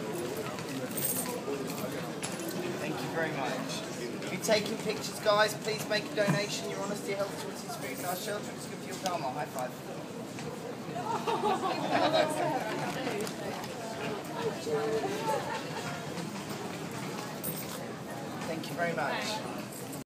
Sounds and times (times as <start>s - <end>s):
Speech: 0.0s - 10.0s, 17.2s - 19.7s.